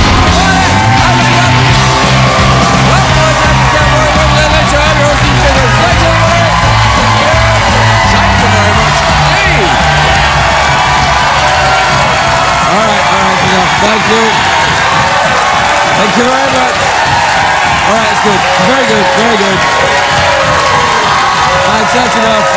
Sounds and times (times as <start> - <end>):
Music: 0.0 - 22.5.